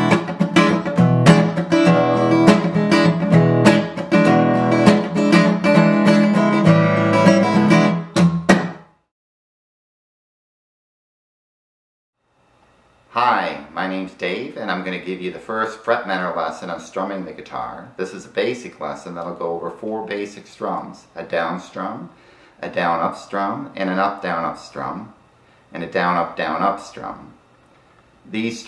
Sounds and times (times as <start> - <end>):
Speech: 13.2 - 27.4, 28.3 - 28.6.